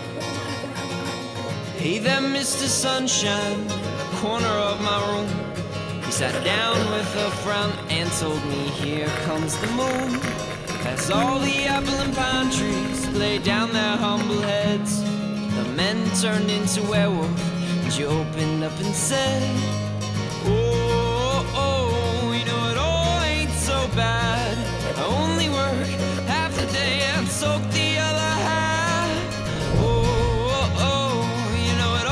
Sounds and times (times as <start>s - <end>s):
Music: 0.0s - 32.1s.